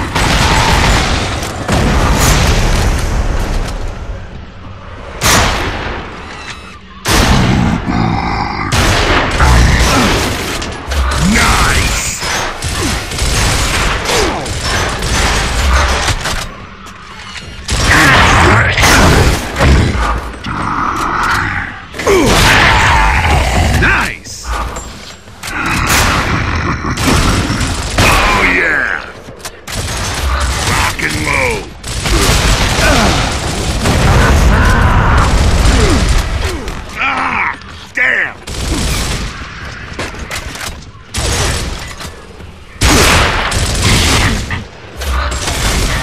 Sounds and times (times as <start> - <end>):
Speech: 30.7 - 31.7.